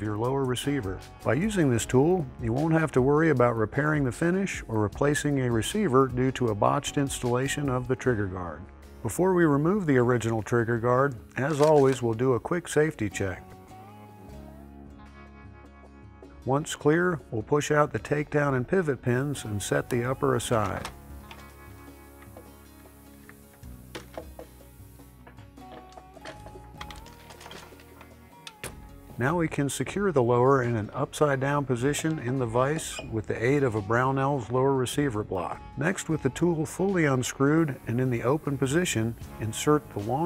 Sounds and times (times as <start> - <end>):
Speech: 0.0 - 13.4, 16.5 - 20.9, 29.2 - 40.2
Music: 0.0 - 40.2.